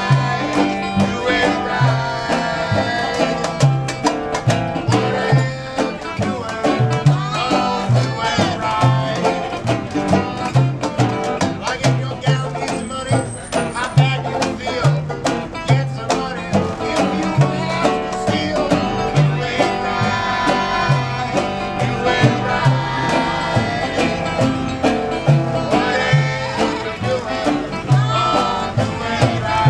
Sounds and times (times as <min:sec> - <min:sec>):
Music: 0:00.0 - 0:29.7.